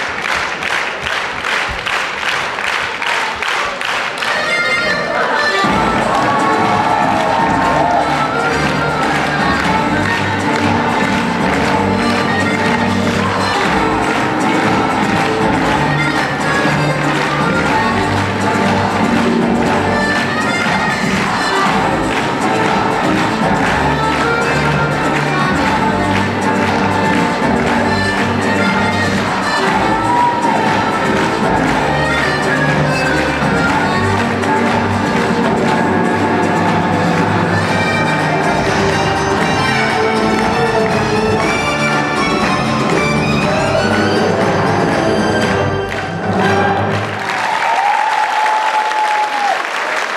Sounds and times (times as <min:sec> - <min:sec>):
Applause: 0:00.0 - 0:50.1
Music: 0:00.0 - 0:50.1.